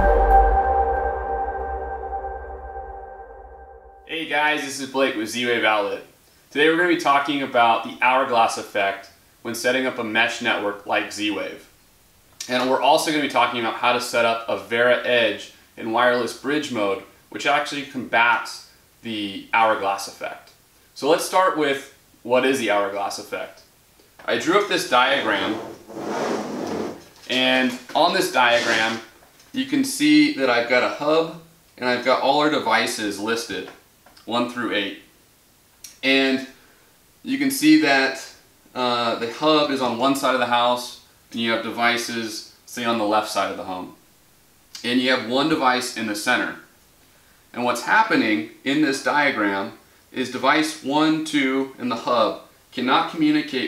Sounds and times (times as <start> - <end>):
Speech: 4.1 - 11.7, 12.4 - 25.7, 27.3 - 35.1, 35.9 - 36.6, 37.3 - 44.0, 44.8 - 46.7, 47.5 - 53.6.